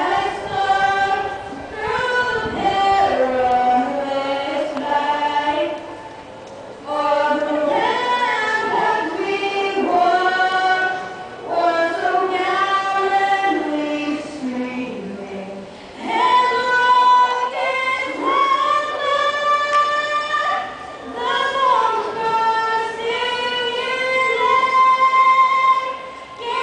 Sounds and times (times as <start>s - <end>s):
Female singing: 0.0s - 5.9s, 6.9s - 26.6s.